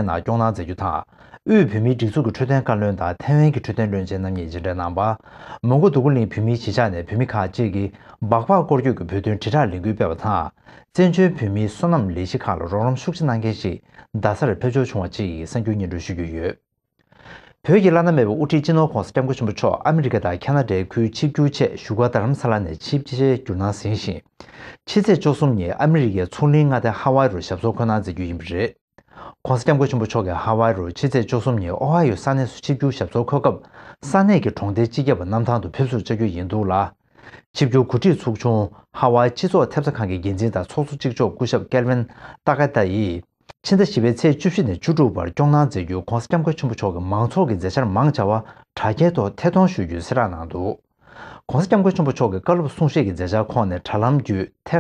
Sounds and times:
Speech: 0.0 - 16.6, 17.6 - 50.8, 51.4 - 54.8.

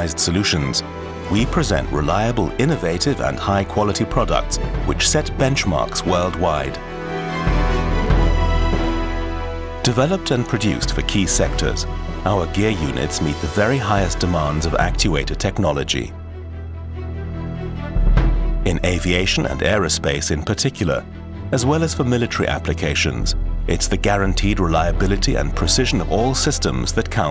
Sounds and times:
Speech: 0.0 - 6.8, 9.8 - 16.2, 18.7 - 27.3
Music: 0.0 - 27.3.

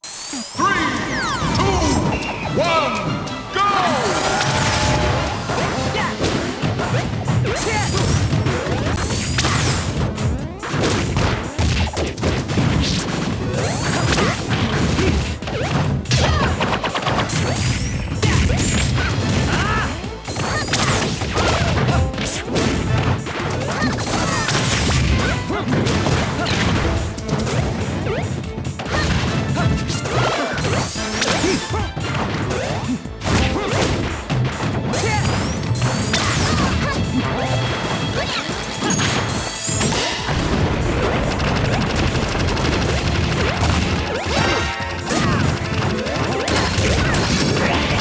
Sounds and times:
Music: 0.5 - 48.0
Smash, crash: 4.0 - 48.0.

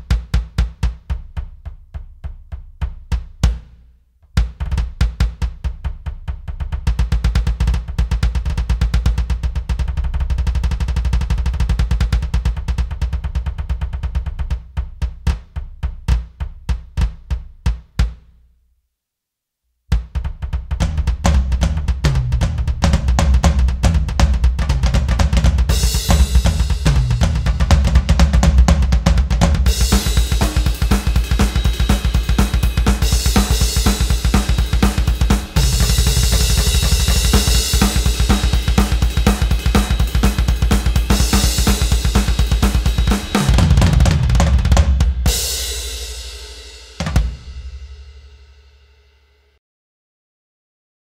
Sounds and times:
Music: 0.0 - 18.6, 19.9 - 49.6.

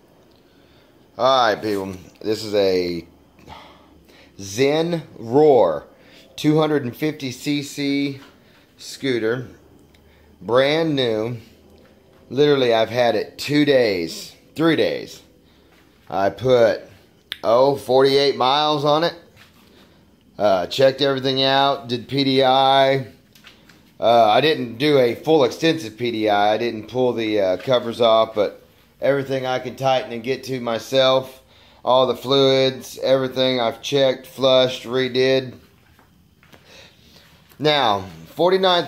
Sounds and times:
Speech: 1.2 - 3.1, 4.4 - 9.6, 10.4 - 11.5, 12.3 - 15.3, 16.1 - 19.3, 20.4 - 23.2, 24.0 - 35.7, 37.6 - 38.8.

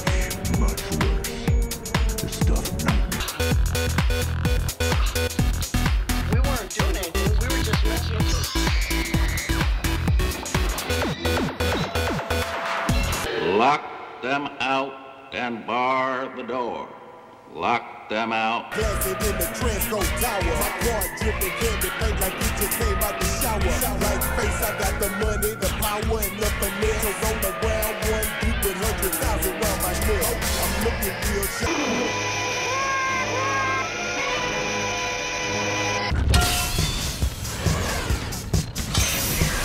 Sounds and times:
Background music: 0.0 - 39.6.

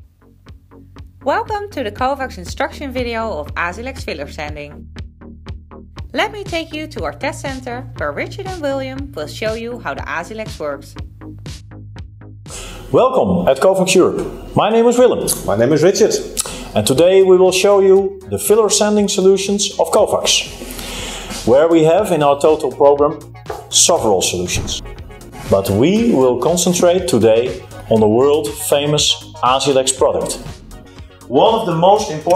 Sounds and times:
Music: 0.0 - 32.3
Speech: 1.2 - 4.8, 6.2 - 11.0, 13.0 - 20.5, 21.5 - 24.8, 25.5 - 30.4, 31.3 - 32.3.

